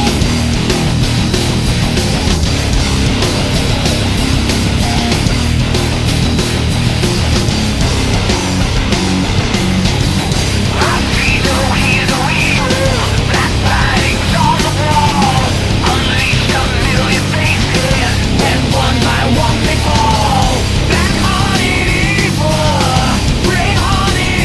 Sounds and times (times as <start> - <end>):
Rhythm and blues: 0.0 - 24.4
Theme music: 10.6 - 23.1.